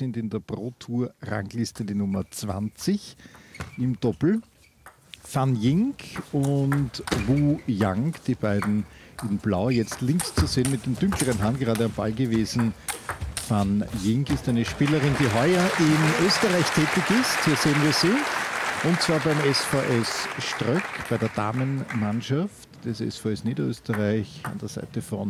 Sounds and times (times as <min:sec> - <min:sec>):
Speech: 0:00.0 - 0:03.2, 0:03.8 - 0:04.5, 0:05.2 - 0:12.8, 0:13.5 - 0:25.3.